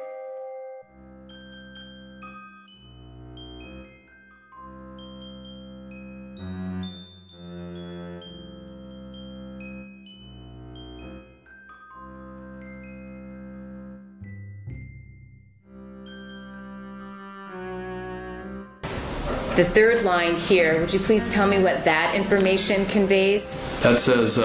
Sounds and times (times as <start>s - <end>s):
Music: 0.0s - 24.4s
Speech: 19.3s - 24.4s.